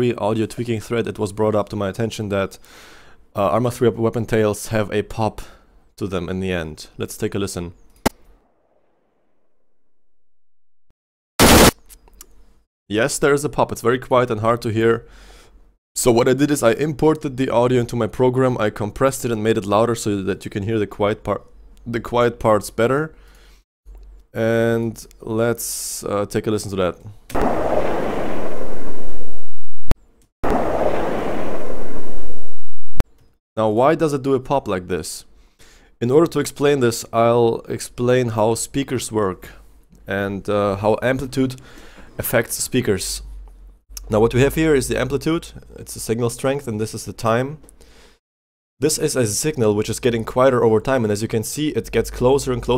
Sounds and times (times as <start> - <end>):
Speech: 0.0 - 2.6, 3.4 - 7.8, 12.9 - 15.1, 16.0 - 23.2, 24.4 - 27.2, 33.6 - 35.3, 36.0 - 41.6, 42.2 - 43.3, 44.0 - 47.6, 48.8 - 52.7.